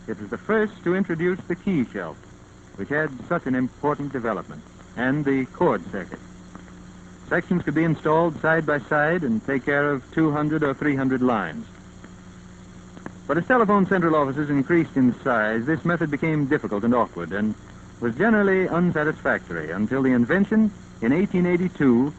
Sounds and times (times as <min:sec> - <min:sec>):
Speech: 0:00.1 - 0:02.2, 0:02.8 - 0:06.2, 0:07.3 - 0:11.7, 0:13.3 - 0:22.1.